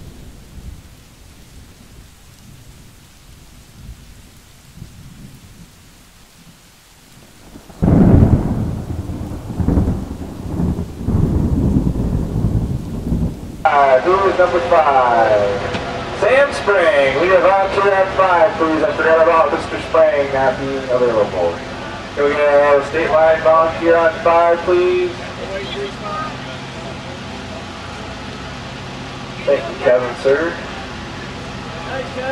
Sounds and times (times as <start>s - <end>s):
Speech: 13.7s - 21.6s, 22.2s - 26.9s, 29.4s - 30.7s, 31.7s - 32.3s.